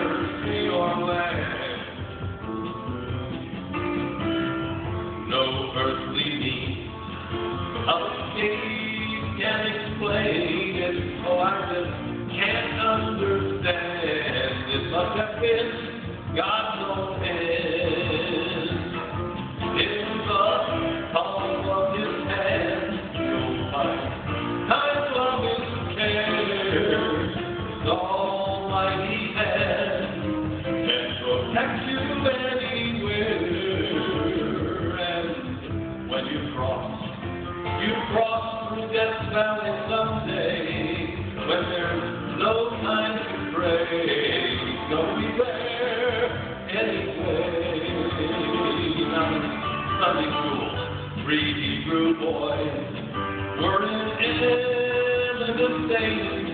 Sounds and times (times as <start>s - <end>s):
Inside, large room or hall: 0.0s - 56.5s
Music: 0.0s - 56.5s
Singing: 7.8s - 19.0s, 19.6s - 37.0s, 37.8s - 53.0s.